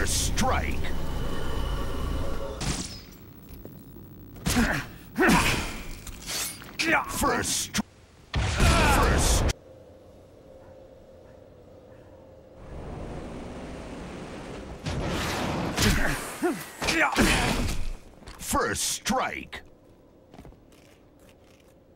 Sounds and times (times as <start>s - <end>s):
Speech: 0.0s - 0.9s, 18.4s - 19.7s.